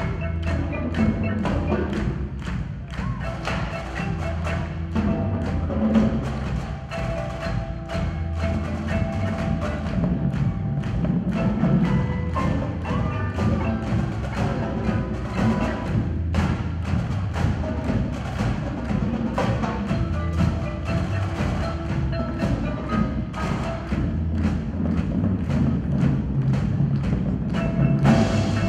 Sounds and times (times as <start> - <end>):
Percussion: 0.0 - 28.6.